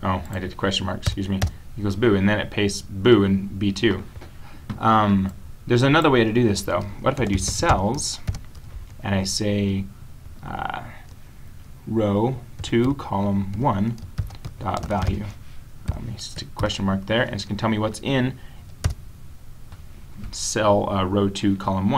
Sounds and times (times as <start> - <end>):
Speech: 0.0 - 4.1, 4.8 - 8.3, 9.0 - 11.1, 11.9 - 14.0, 14.6 - 18.4, 20.2 - 21.9.